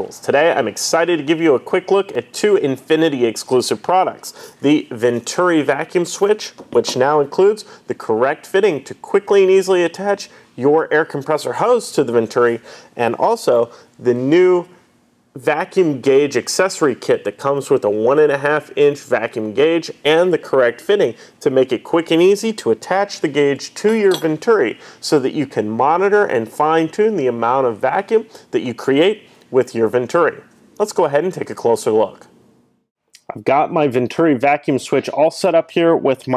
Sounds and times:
Speech: 0.0s - 14.8s, 15.4s - 32.3s, 33.2s - 36.3s.

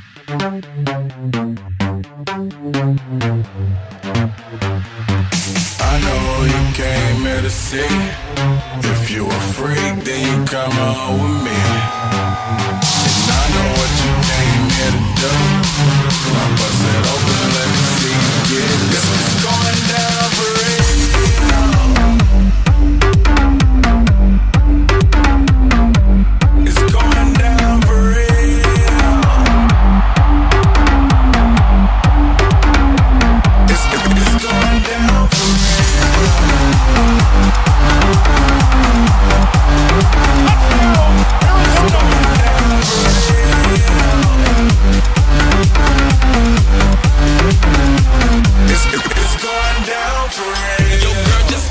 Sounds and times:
Dance music: 0.0s - 51.7s.

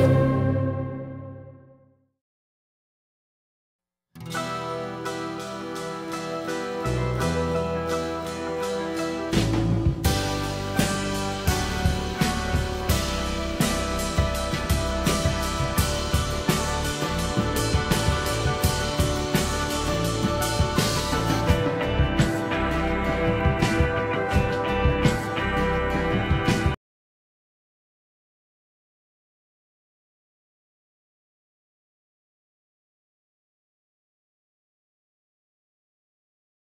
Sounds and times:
Music: 0.0s - 2.2s, 4.2s - 26.8s.

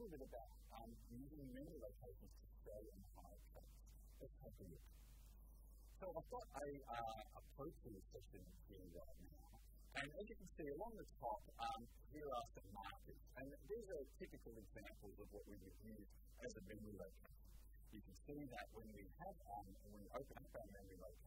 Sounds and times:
Speech: 0.0s - 4.8s, 6.0s - 17.2s, 17.9s - 21.2s.

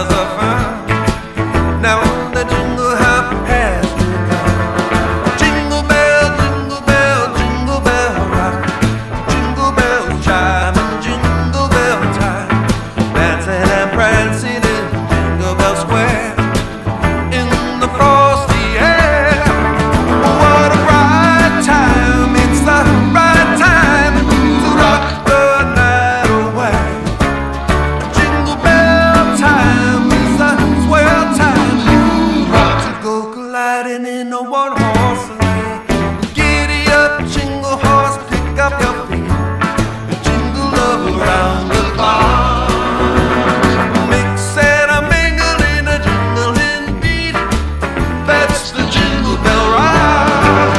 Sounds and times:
Music: 0.0s - 50.7s.

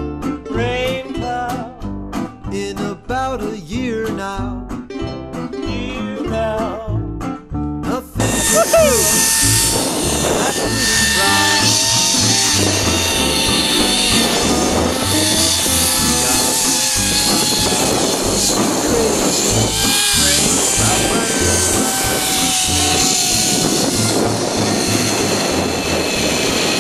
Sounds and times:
Music: 0.0s - 26.8s
Outside, rural or natural: 7.2s - 26.8s
Speech: 8.2s - 9.2s, 20.2s - 21.8s.

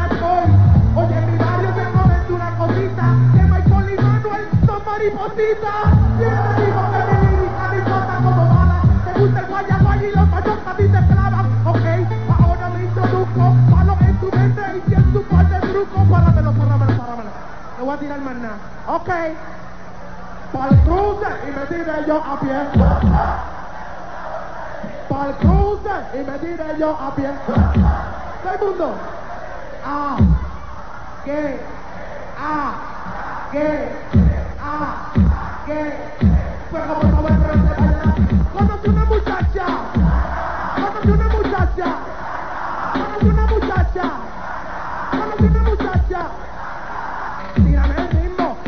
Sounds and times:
Music: 0.0s - 5.2s, 5.8s - 17.1s, 37.0s - 42.0s, 43.0s - 44.0s, 45.2s - 46.1s, 47.5s - 48.6s.

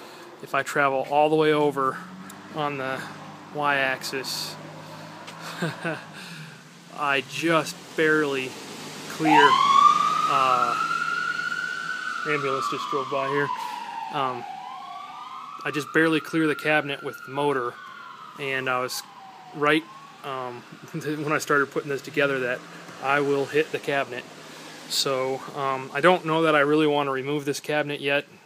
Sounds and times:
Police car (siren): 1.9s - 27.4s.

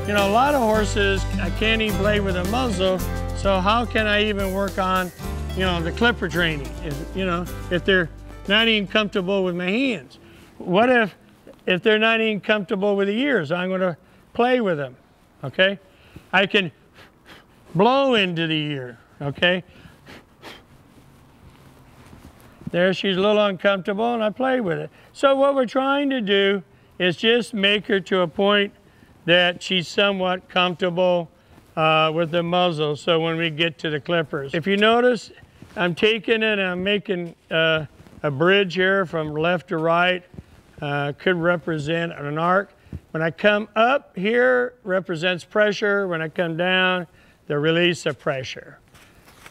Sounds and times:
Music: 0.0s - 9.6s
Speech: 0.0s - 16.8s, 17.8s - 19.7s, 22.7s - 48.8s.

